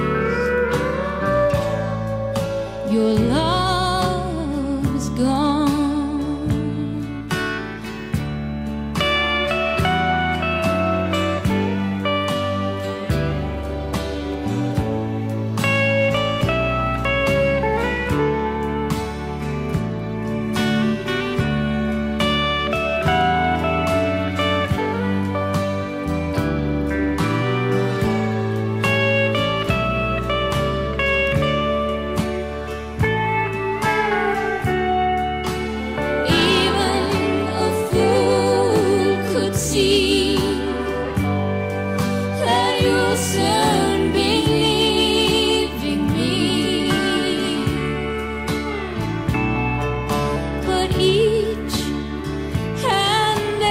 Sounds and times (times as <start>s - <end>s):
Music: 0.0s - 53.7s.